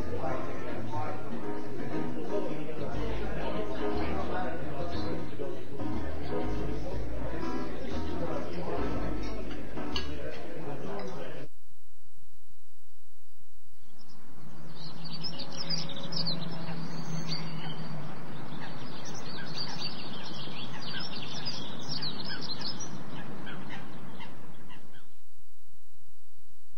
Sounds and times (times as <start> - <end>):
Chirp, tweet: 13.8 - 25.1.